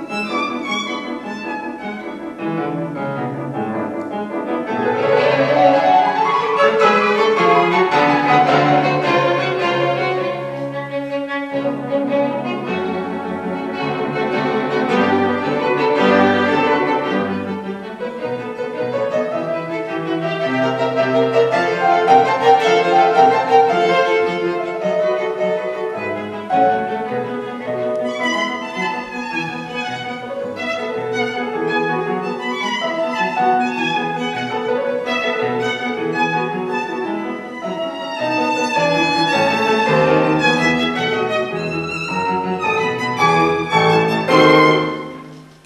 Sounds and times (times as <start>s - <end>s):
Violin, fiddle: 0.0s - 45.6s.